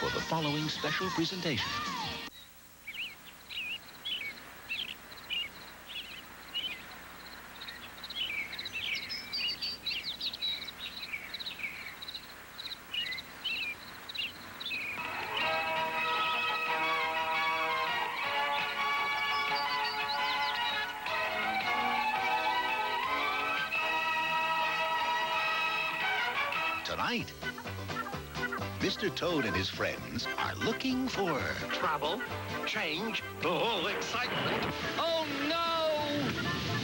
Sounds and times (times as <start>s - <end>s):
Speech: 0.0s - 2.1s, 28.8s - 34.4s, 35.0s - 36.4s
Music: 0.0s - 2.3s, 15.0s - 36.8s.